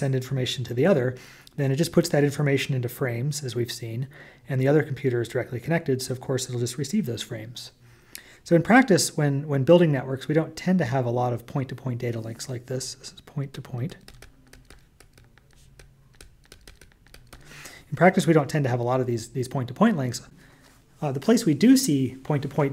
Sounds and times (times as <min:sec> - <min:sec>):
Speech: 0:00.0 - 0:07.8, 0:08.5 - 0:14.0, 0:17.9 - 0:20.3, 0:21.0 - 0:22.7.